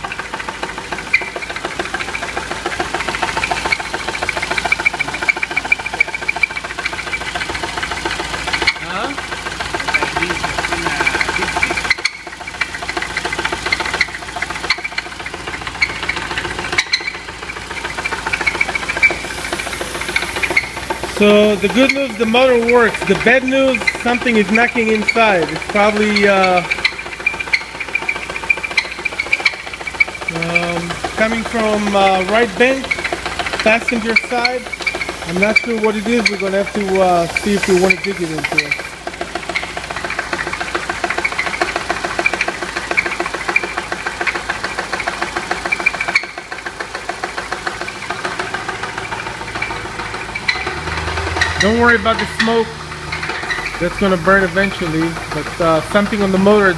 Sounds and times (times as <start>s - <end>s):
Engine knocking: 0.0s - 56.7s
Speech: 8.8s - 11.7s, 21.2s - 26.8s, 30.3s - 33.0s, 33.6s - 34.7s, 35.3s - 38.9s, 51.6s - 52.8s, 53.8s - 56.7s.